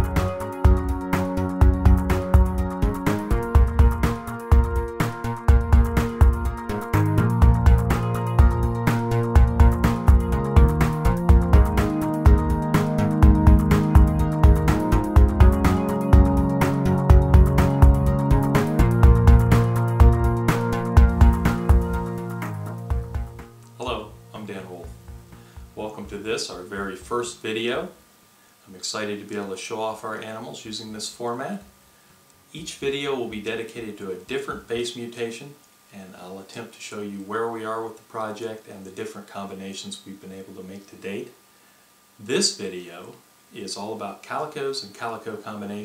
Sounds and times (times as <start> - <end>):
Music: 0.0 - 27.4
Inside, small room: 0.0 - 45.8
Speech: 23.8 - 24.9, 25.8 - 28.0, 28.7 - 31.7, 32.5 - 41.4, 42.2 - 45.8.